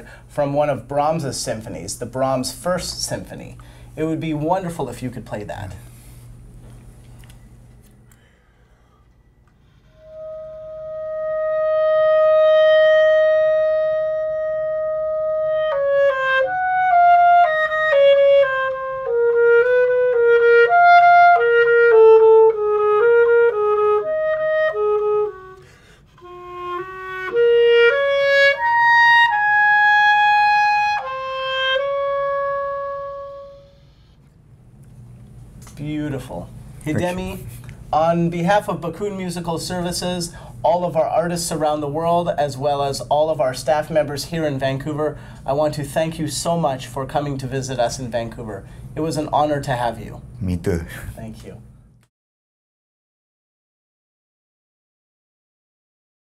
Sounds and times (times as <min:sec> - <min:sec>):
Inside, small room: 0:00.0 - 0:52.1
Clarinet: 0:09.5 - 0:34.4.